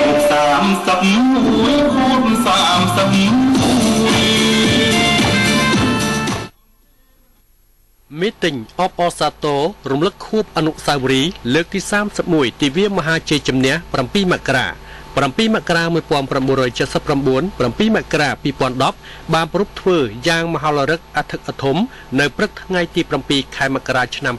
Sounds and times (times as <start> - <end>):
Music: 0.0 - 7.1
Male speech, man speaking: 8.1 - 24.3.